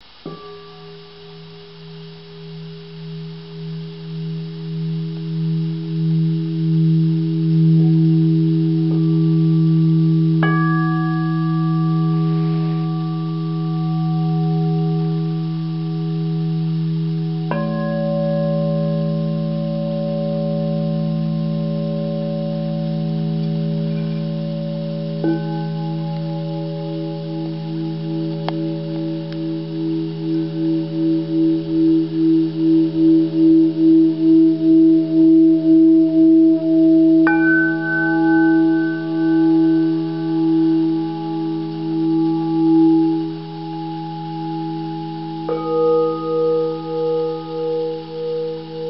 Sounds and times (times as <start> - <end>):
Singing bowl: 0.0 - 48.9
Glass: 0.2 - 48.9.